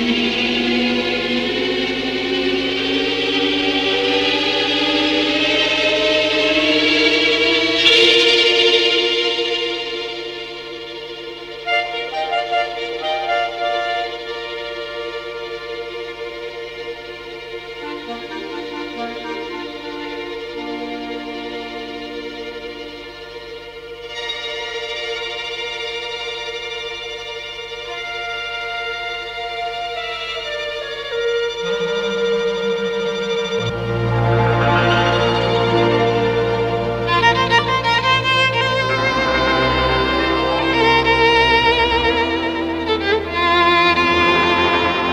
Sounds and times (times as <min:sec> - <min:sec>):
Violin, fiddle: 0:00.0 - 0:45.1.